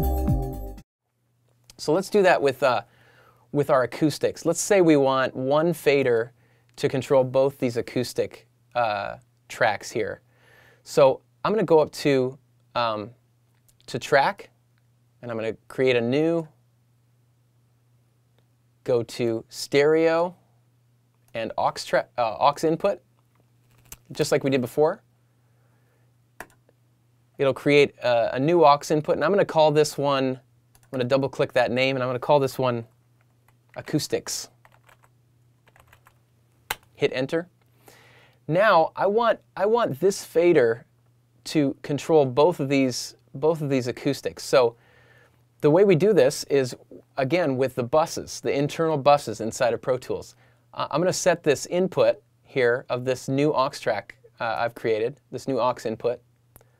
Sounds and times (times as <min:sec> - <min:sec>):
Speech: 0:01.7 - 0:02.9, 0:03.5 - 0:10.2, 0:10.8 - 0:13.2, 0:13.8 - 0:14.6, 0:15.2 - 0:16.6, 0:18.8 - 0:20.4, 0:21.3 - 0:23.0, 0:24.1 - 0:25.0, 0:27.4 - 0:32.9, 0:33.8 - 0:34.6, 0:37.0 - 0:37.5, 0:38.5 - 0:44.8, 0:45.6 - 0:56.2.